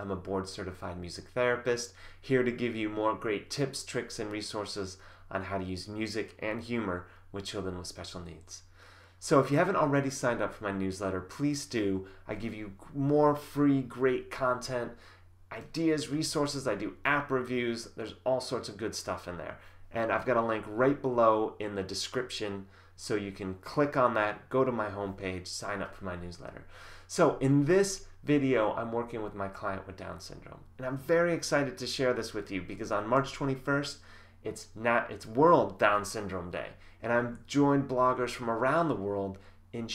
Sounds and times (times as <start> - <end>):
Speech: 0.0 - 39.9.